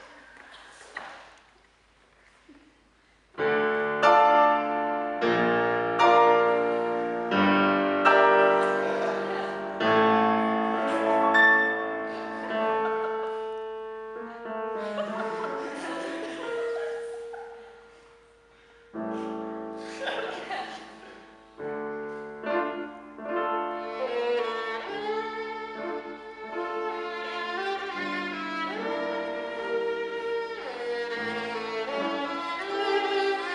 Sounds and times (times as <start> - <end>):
Musical instrument: 3.4 - 33.5.